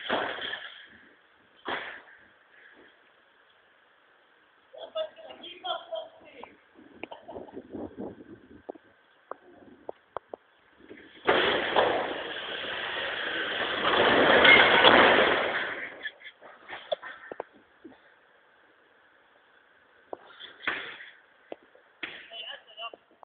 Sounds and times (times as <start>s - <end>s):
Speech: 4.8s - 6.6s, 22.2s - 23.1s.